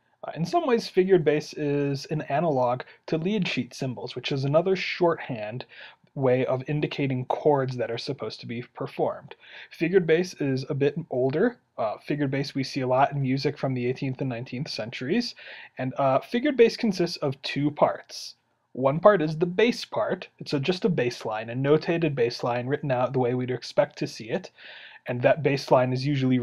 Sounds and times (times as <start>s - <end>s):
Speech: 0.3s - 26.4s.